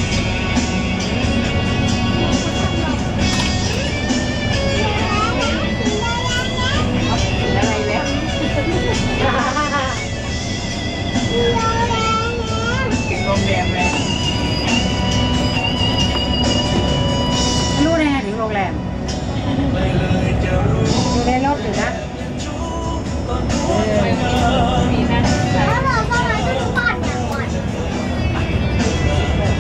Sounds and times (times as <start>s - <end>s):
Music: 0.0s - 29.6s.